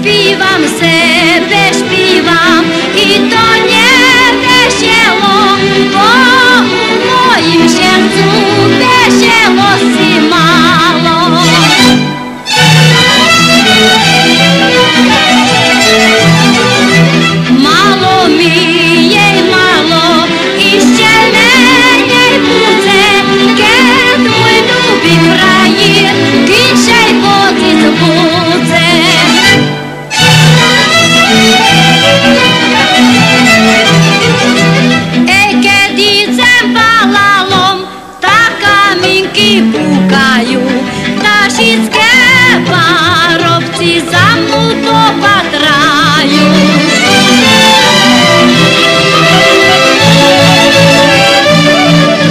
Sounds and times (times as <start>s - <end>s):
Music: 0.0s - 52.3s.